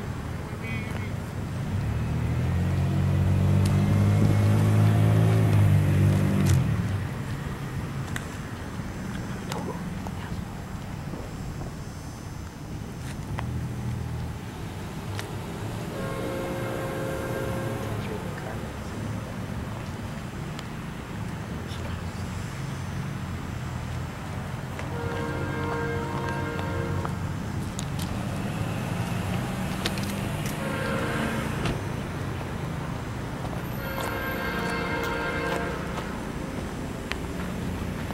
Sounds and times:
Speech: 0.4s - 1.2s, 9.5s - 10.5s, 17.9s - 19.1s, 21.5s - 22.4s.

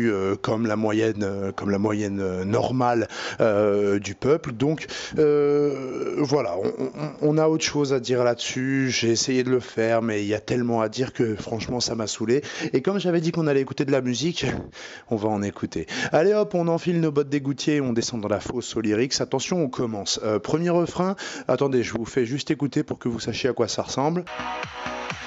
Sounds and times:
Speech: 0.0s - 24.3s.

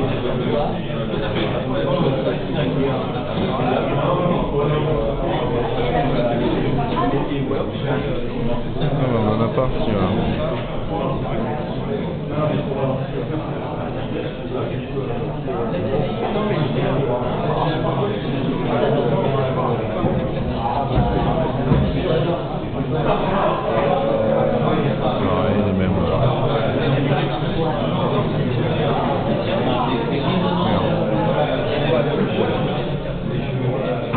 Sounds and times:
Speech: 0.0s - 34.1s.

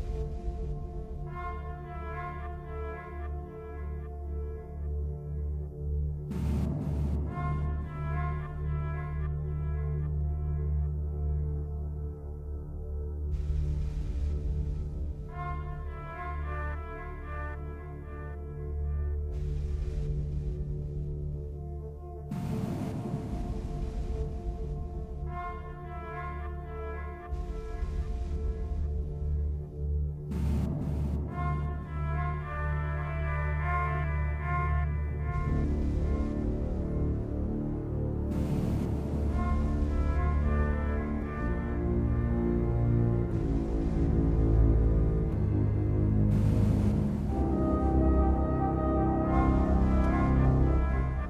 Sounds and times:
Music: 0.0s - 51.3s.

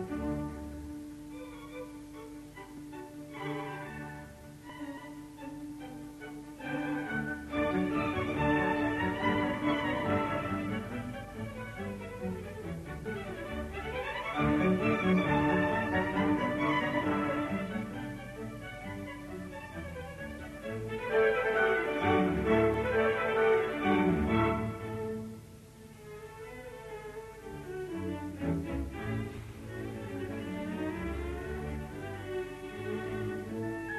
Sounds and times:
Violin, fiddle: 0.0s - 33.9s.

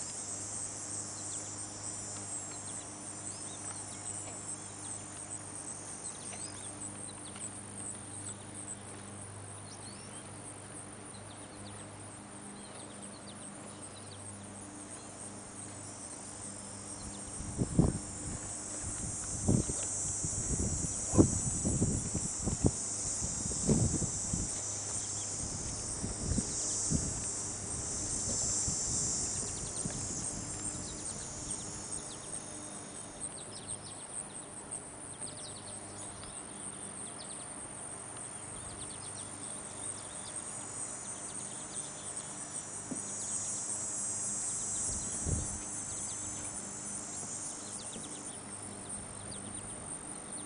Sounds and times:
Chirp, tweet: 6.0s - 7.5s, 9.6s - 10.3s, 11.1s - 11.9s, 12.5s - 14.3s, 33.3s - 34.4s, 35.1s - 37.5s, 47.7s - 50.4s.

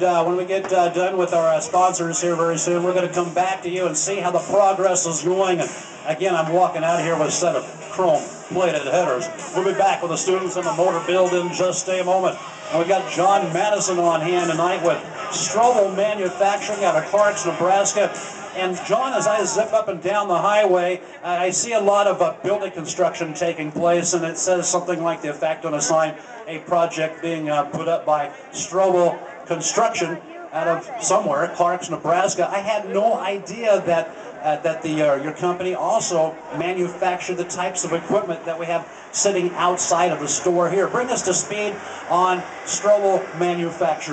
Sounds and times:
Speech: 0.0s - 44.1s.

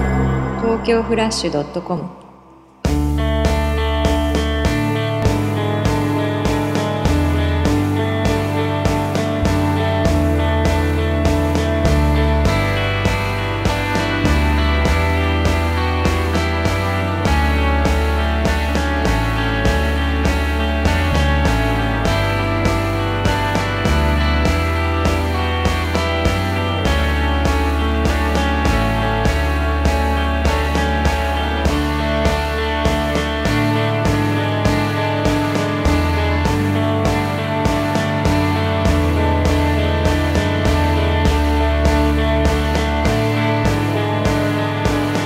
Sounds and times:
Music: 0.0s - 45.2s.

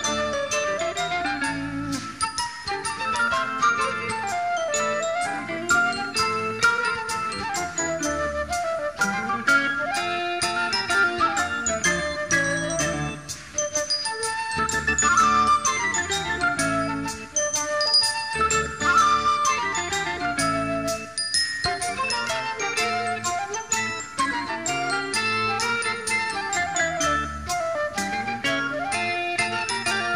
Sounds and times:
Flute: 0.0s - 30.1s.

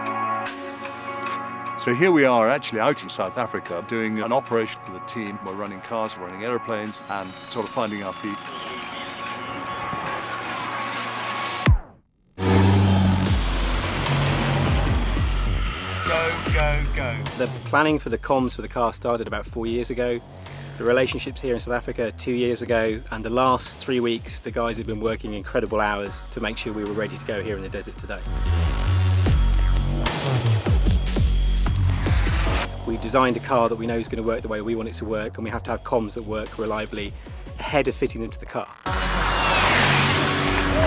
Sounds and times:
Music: 0.0s - 40.8s
Speech: 1.8s - 8.4s, 16.1s - 20.2s, 20.8s - 28.3s, 32.8s - 38.7s.

